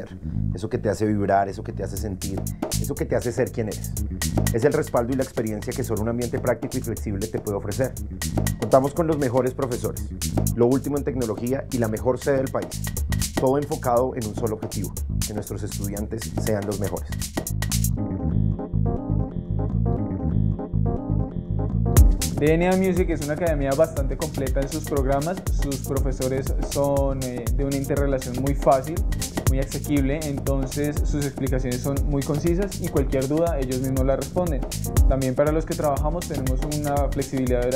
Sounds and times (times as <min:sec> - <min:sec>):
Speech: 0:00.0 - 0:08.0, 0:08.6 - 0:10.0, 0:10.6 - 0:12.7, 0:13.4 - 0:17.2, 0:22.4 - 0:37.7
Music: 0:00.0 - 0:37.7.